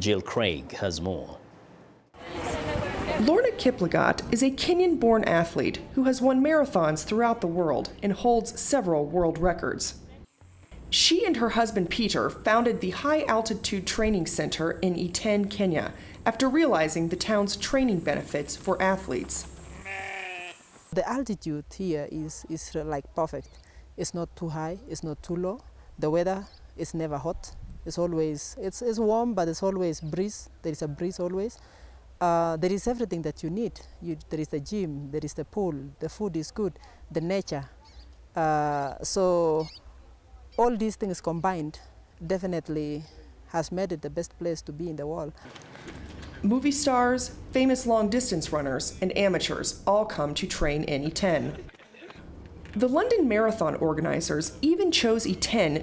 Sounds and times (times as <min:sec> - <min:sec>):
Outside, rural or natural: 0:02.0 - 0:55.8.